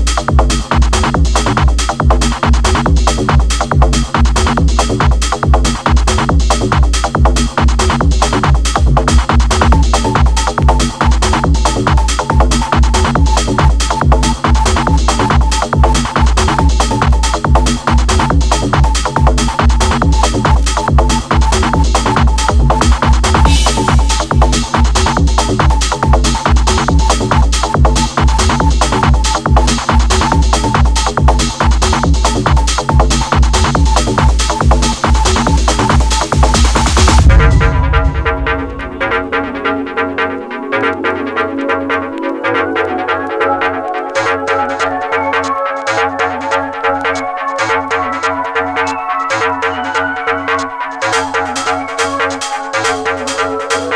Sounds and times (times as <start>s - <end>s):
Techno: 0.0s - 53.9s.